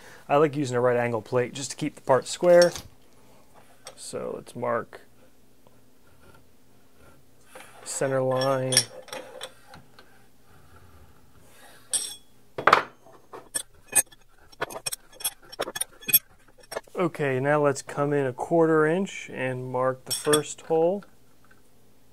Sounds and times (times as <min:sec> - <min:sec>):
Inside, small room: 0:00.0 - 0:22.1
Speech: 0:00.3 - 0:02.8, 0:03.9 - 0:05.1, 0:07.9 - 0:08.9, 0:17.0 - 0:21.1
Tools: 0:08.0 - 0:09.6, 0:11.9 - 0:16.9, 0:20.1 - 0:20.6.